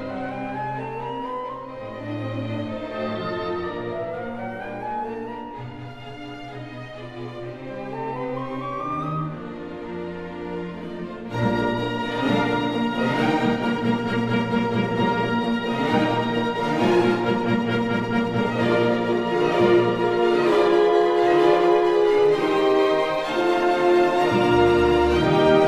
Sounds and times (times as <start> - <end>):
Musical instrument: 0.0 - 25.6.